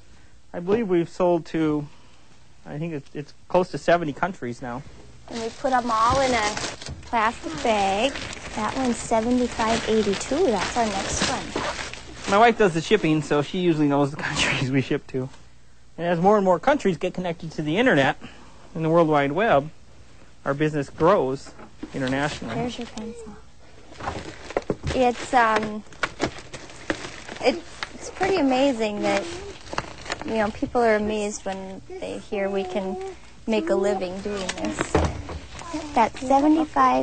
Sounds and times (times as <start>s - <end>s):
Inside, small room: 0.0s - 37.0s.